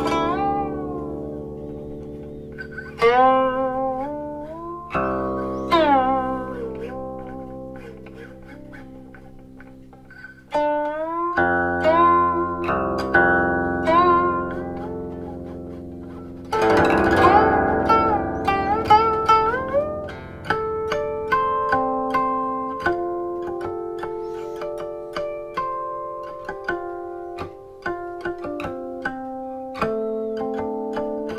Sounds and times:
Music: 0.0 - 31.3.

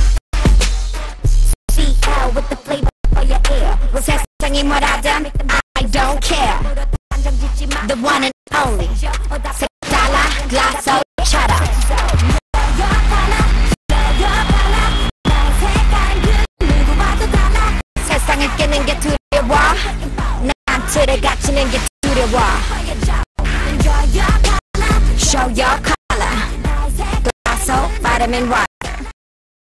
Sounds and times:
Music: 0.0 - 29.1
Speech: 5.8 - 6.6, 7.7 - 9.0, 9.8 - 11.9, 18.0 - 22.6, 25.2 - 26.6, 27.5 - 29.0.

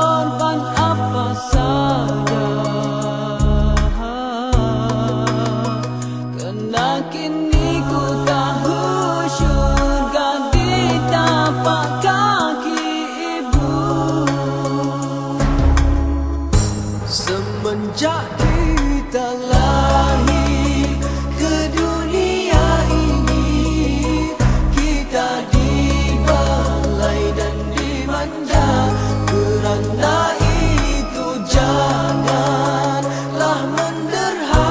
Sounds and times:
Music: 0.0 - 34.7.

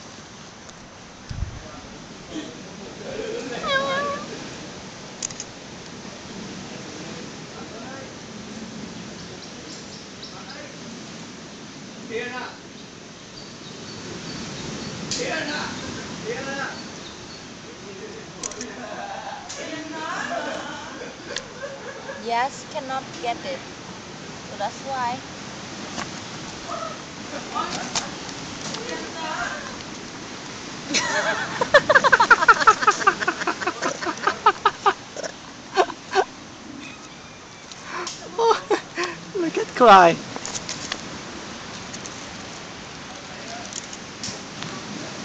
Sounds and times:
Animal: 26.6 - 27.0.

